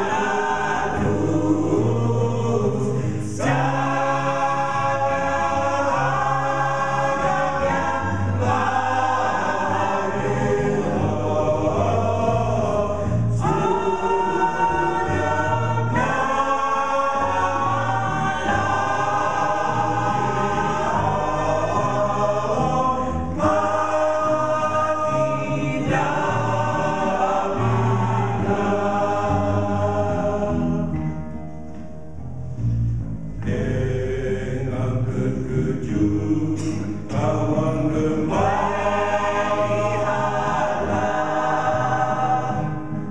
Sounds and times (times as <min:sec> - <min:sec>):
Choir: 0:00.0 - 0:31.4, 0:33.4 - 0:43.1
Gospel music: 0:00.0 - 0:43.1.